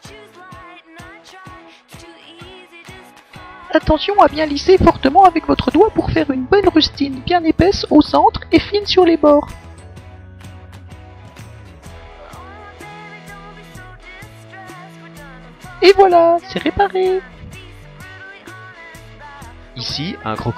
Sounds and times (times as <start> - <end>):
Music: 0.0 - 20.5
Speech: 3.8 - 9.5, 15.8 - 17.3, 19.8 - 20.5.